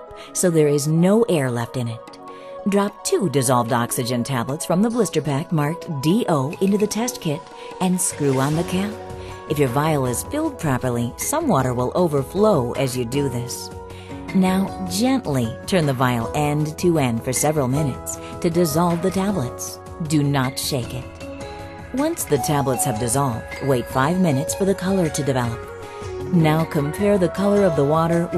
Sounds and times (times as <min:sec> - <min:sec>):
Music: 0:00.0 - 0:28.3
Speech: 0:00.4 - 0:02.0, 0:02.7 - 0:13.7, 0:14.3 - 0:21.1, 0:22.0 - 0:25.6, 0:26.3 - 0:28.3.